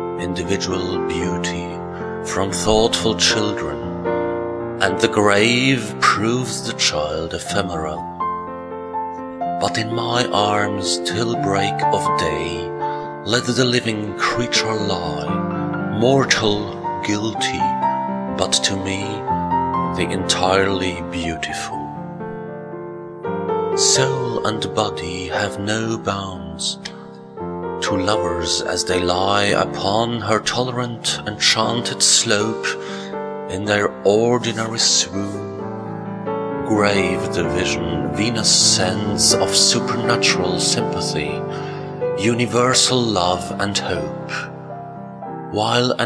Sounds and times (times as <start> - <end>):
Music: 0.0 - 46.0
Speech: 0.2 - 3.9, 4.8 - 8.1, 9.6 - 17.8, 18.4 - 19.3, 20.0 - 22.0, 23.8 - 27.0, 27.8 - 35.6, 36.7 - 44.5, 45.6 - 46.0.